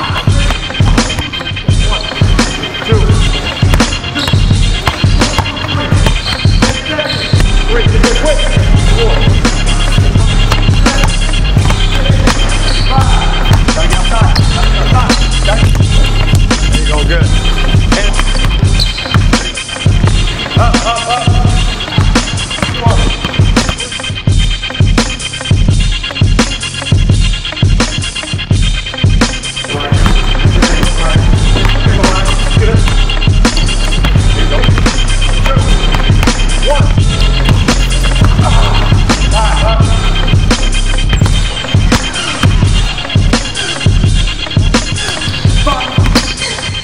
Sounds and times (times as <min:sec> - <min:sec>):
Music: 0:00.0 - 0:46.8.